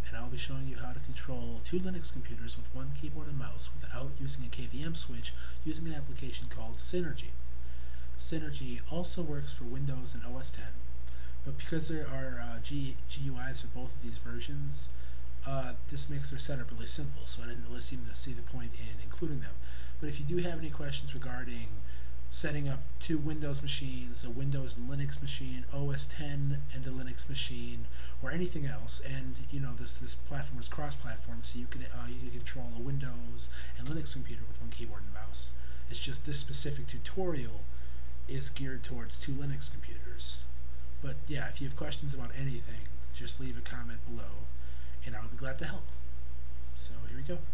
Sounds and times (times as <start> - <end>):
Speech: 0.0 - 7.4, 8.2 - 10.8, 11.4 - 37.7, 38.3 - 46.0, 46.8 - 47.5.